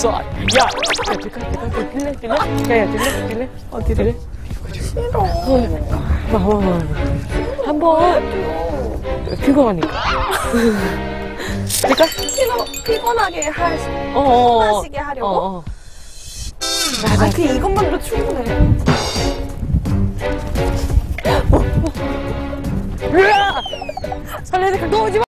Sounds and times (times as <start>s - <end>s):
Music: 0.0s - 15.7s, 16.6s - 25.2s.